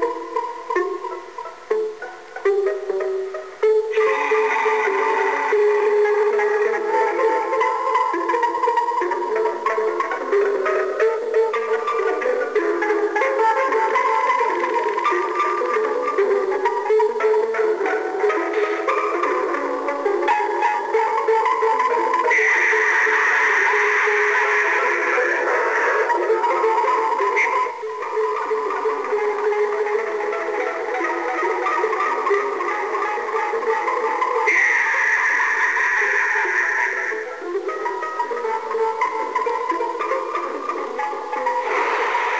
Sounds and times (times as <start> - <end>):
Music: 0.0 - 42.3.